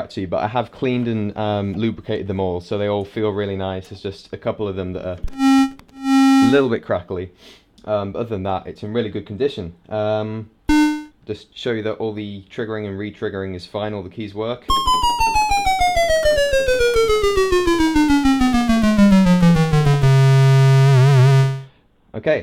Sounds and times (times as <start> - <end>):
Music: 5.3 - 6.7, 10.7 - 11.1, 14.7 - 21.7
Speech: 6.4 - 6.8.